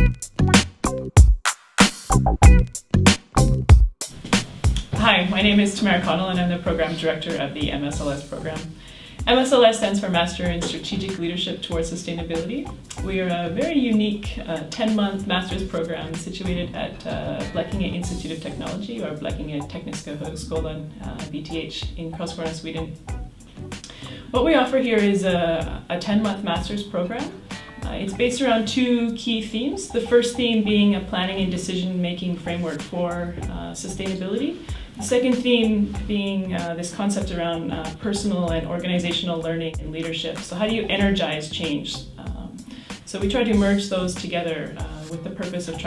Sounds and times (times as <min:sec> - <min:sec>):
Music: 0:00.0 - 0:45.8
Speech: 0:04.9 - 0:23.0, 0:24.3 - 0:45.8.